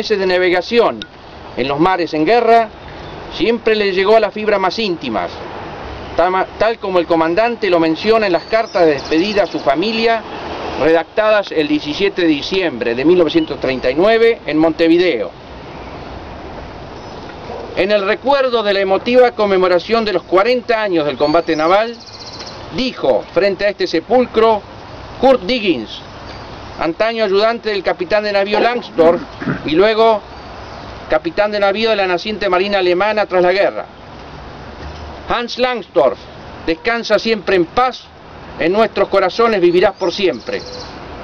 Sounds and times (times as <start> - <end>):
Male speech, man speaking: 0.0 - 1.0, 1.6 - 2.7, 3.3 - 5.4, 6.2 - 15.4, 17.8 - 22.0, 22.8 - 24.6, 25.2 - 26.0, 26.8 - 30.2, 31.1 - 33.9, 35.3 - 40.7
Narration, monologue: 0.0 - 41.2.